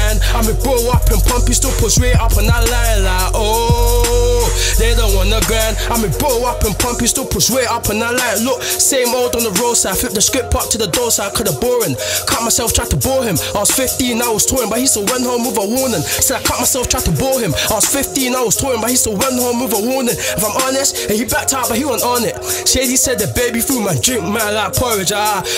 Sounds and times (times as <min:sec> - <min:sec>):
Music: 0:00.0 - 0:25.5
Singing: 0:00.0 - 0:25.5.